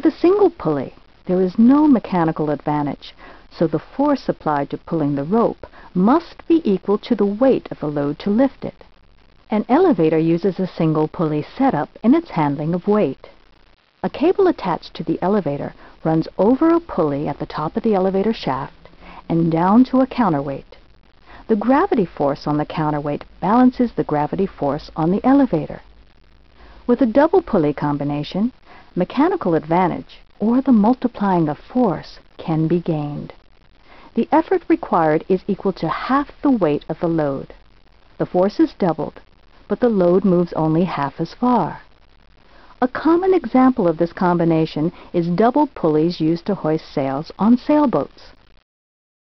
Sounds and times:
Speech: 0:00.0 - 0:08.8, 0:09.5 - 0:13.3, 0:14.0 - 0:20.8, 0:21.5 - 0:25.8, 0:26.9 - 0:33.4, 0:34.2 - 0:37.6, 0:38.2 - 0:41.9, 0:42.8 - 0:48.4.

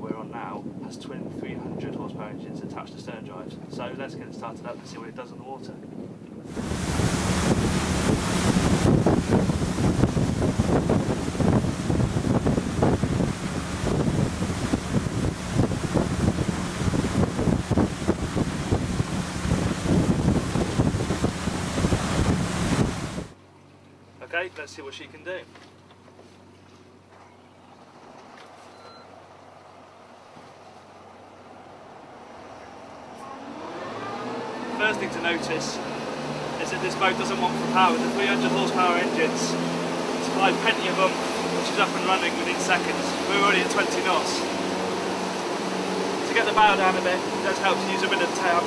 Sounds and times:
Motorboat, speedboat: 0:00.4 - 0:48.6.

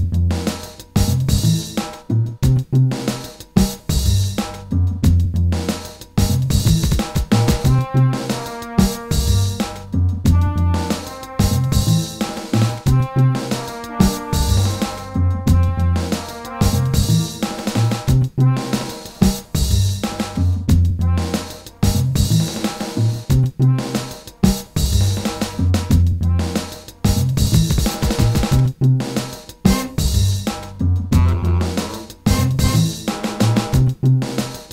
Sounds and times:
Music: 0:00.0 - 0:34.7.

